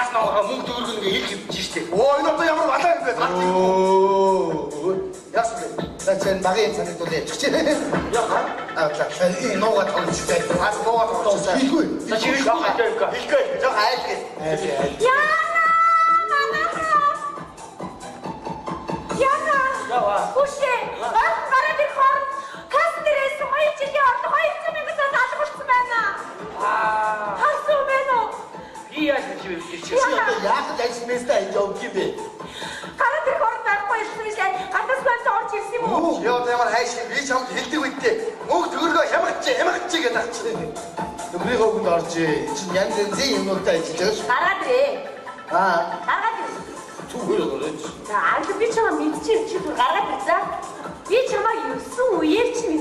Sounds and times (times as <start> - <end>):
Music: 0.0 - 52.8
Female speech, woman speaking: 14.9 - 17.4, 19.2 - 26.2, 27.3 - 28.4, 29.0 - 30.5, 33.0 - 36.0, 44.2 - 45.1, 48.0 - 52.8.